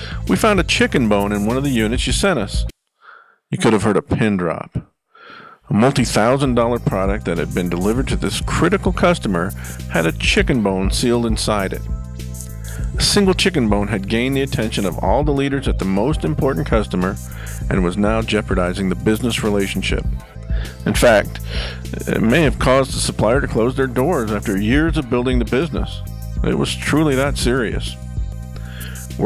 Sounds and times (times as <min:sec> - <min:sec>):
Music: 0:00.0 - 0:02.8, 0:05.8 - 0:29.2
Speech: 0:00.2 - 0:02.7, 0:03.5 - 0:04.9, 0:05.7 - 0:11.8, 0:13.0 - 0:20.1, 0:20.8 - 0:28.0.